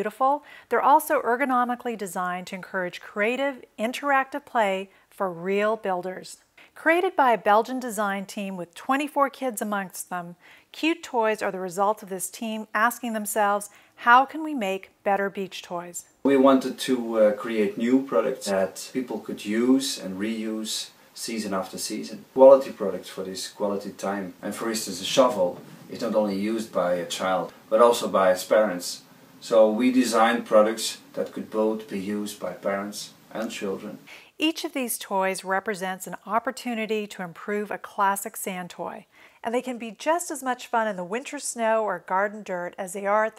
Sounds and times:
Speech: 0.0 - 43.3.

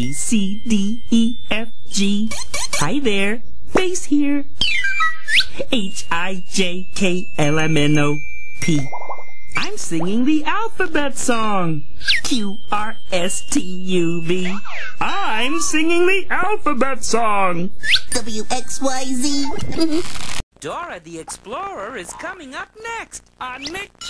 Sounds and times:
Speech: 2.8 - 4.4, 5.7 - 8.9, 9.6 - 20.0, 20.6 - 24.1.

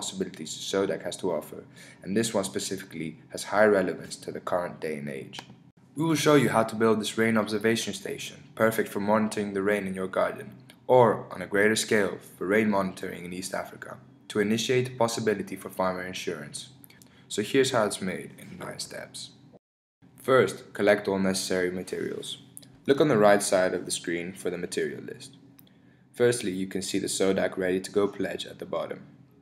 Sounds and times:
Speech: 0.0 - 19.4, 20.2 - 25.4, 26.2 - 29.1.

